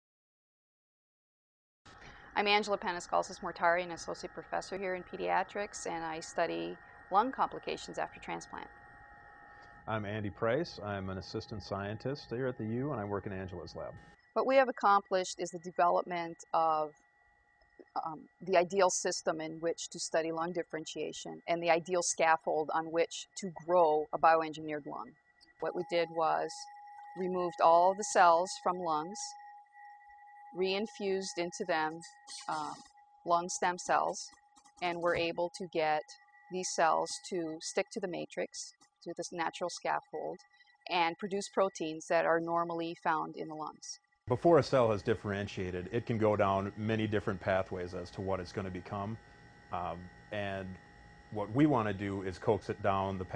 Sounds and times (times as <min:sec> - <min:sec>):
Speech: 0:02.4 - 0:08.6, 0:09.9 - 0:16.9, 0:17.9 - 0:26.6, 0:27.2 - 0:29.3, 0:30.6 - 0:49.2, 0:49.8 - 0:50.8, 0:51.4 - 0:53.3.